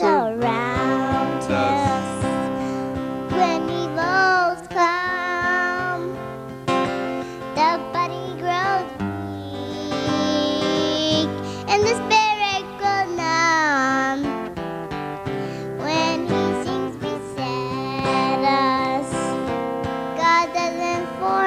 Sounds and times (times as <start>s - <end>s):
Music: 0.0s - 21.4s.